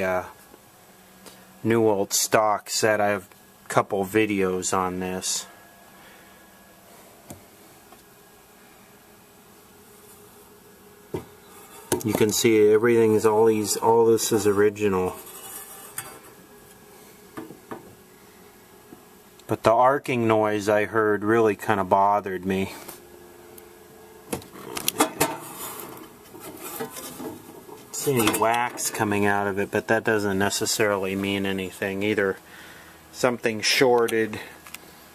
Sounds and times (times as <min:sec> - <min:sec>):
Speech: 0:00.0 - 0:00.4, 0:01.6 - 0:05.5, 0:12.0 - 0:15.3, 0:19.5 - 0:22.9, 0:27.9 - 0:32.4, 0:33.1 - 0:34.6.